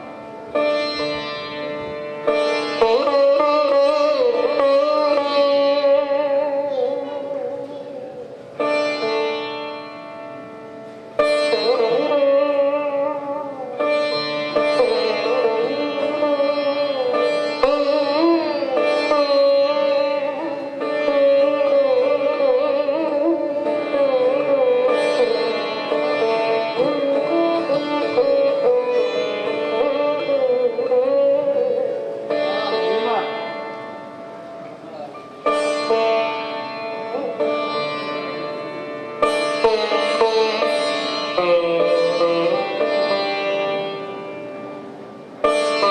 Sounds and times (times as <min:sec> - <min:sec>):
Carnatic music: 0:00.0 - 0:45.9
Sitar: 0:00.0 - 0:45.9
Speech: 0:34.8 - 0:35.3.